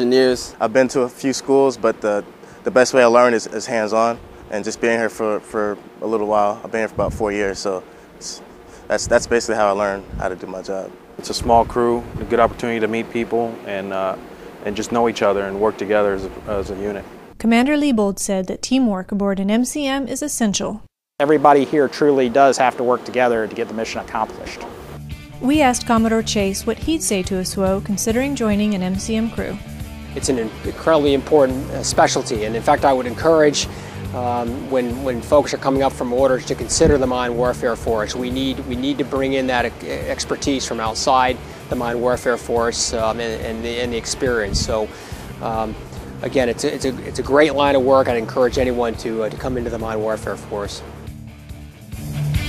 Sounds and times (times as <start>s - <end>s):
Speech: 0.0s - 24.7s, 25.4s - 29.6s, 30.2s - 50.8s
Music: 21.9s - 52.4s.